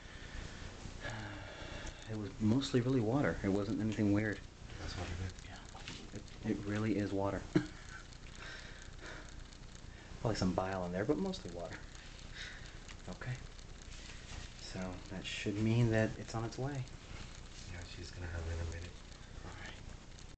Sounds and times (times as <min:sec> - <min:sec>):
Speech: 0:02.1 - 0:05.7, 0:06.4 - 0:07.5, 0:10.2 - 0:11.8, 0:13.1 - 0:13.4, 0:14.6 - 0:16.9, 0:17.7 - 0:19.0.